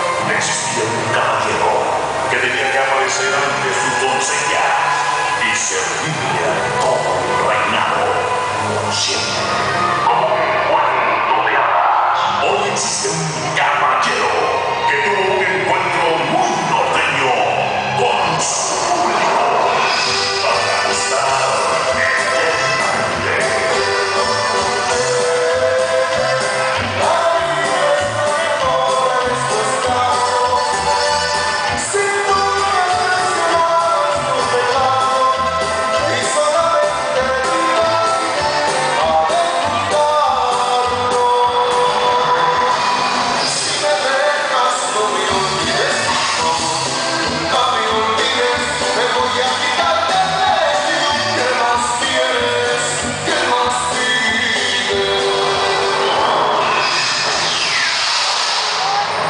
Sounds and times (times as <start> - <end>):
Pop music: 0.0 - 59.2.